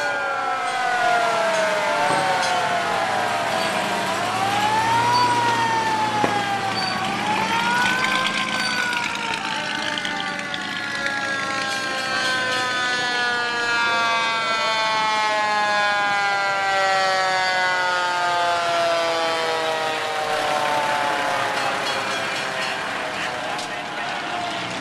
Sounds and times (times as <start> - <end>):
Fire engine, fire truck (siren): 0.0 - 24.8
Truck: 0.8 - 13.1, 20.3 - 24.8.